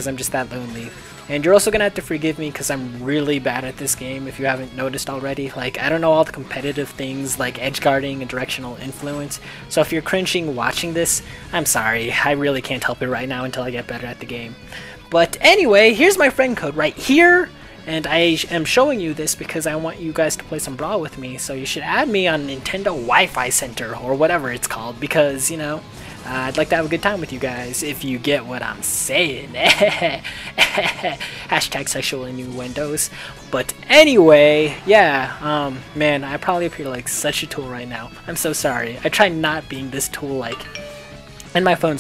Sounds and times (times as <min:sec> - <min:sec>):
Speech: 0:00.0 - 0:29.8, 0:31.5 - 0:40.7, 0:41.5 - 0:42.0
Music: 0:00.0 - 0:42.0.